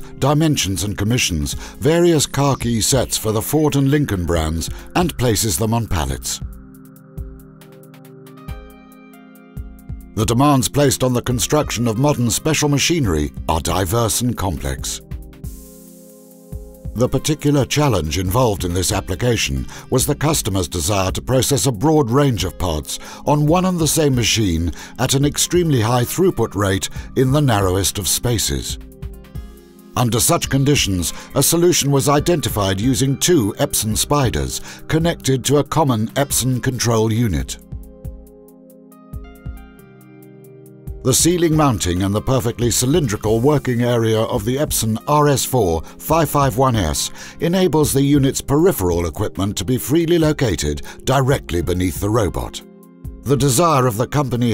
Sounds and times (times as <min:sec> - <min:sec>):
Music: 0:00.0 - 0:54.5
Speech: 0:00.2 - 0:06.4, 0:10.2 - 0:15.0, 0:17.0 - 0:28.8, 0:30.0 - 0:37.6, 0:41.0 - 0:52.6, 0:53.3 - 0:54.5.